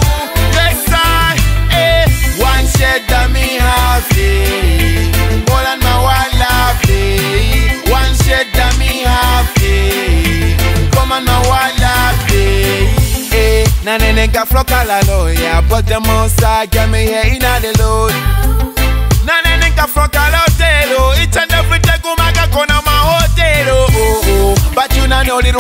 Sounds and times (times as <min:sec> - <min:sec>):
Music: 0:00.0 - 0:25.6.